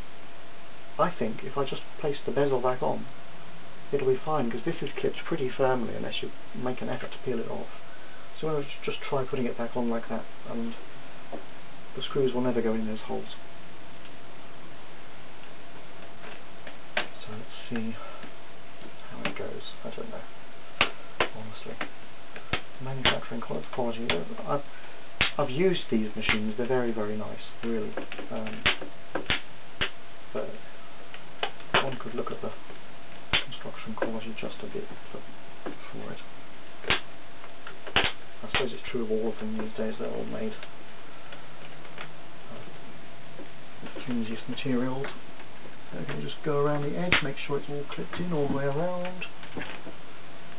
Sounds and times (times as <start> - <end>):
Inside, small room: 0.0 - 50.5
Speech: 1.0 - 3.1, 3.9 - 7.8, 8.4 - 10.8, 12.0 - 13.4, 17.1 - 18.2, 19.0 - 20.3, 21.3 - 21.8, 22.8 - 24.7, 25.3 - 28.7, 30.4 - 30.6, 31.8 - 32.6, 33.4 - 36.3, 38.4 - 40.7, 42.5 - 42.7, 43.8 - 45.2, 45.9 - 49.3.